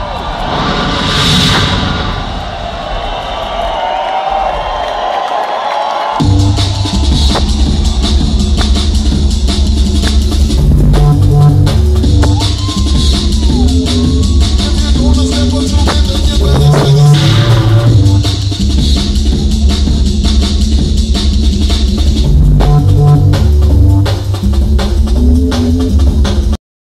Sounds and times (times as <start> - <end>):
Dance music: 6.0 - 26.6.